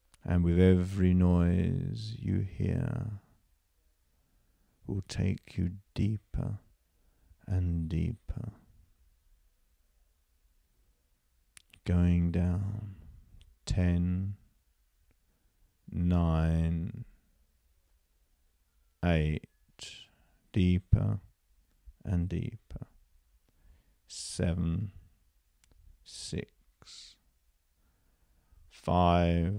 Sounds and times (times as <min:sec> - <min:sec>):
Inside, small room: 0:00.0 - 0:29.5
Speech: 0:00.2 - 0:03.3, 0:04.9 - 0:06.7, 0:07.4 - 0:08.7, 0:11.6 - 0:13.0, 0:13.6 - 0:14.4, 0:15.9 - 0:17.2, 0:19.0 - 0:21.3, 0:22.0 - 0:23.0, 0:24.1 - 0:25.0, 0:26.1 - 0:27.2, 0:28.8 - 0:29.5.